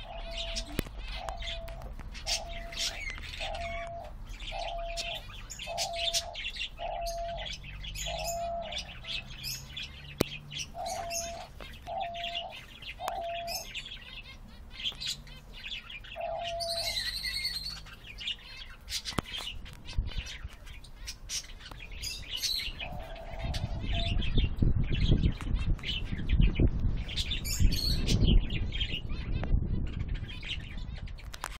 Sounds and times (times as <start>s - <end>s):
Chirp, tweet: 0.0s - 31.5s.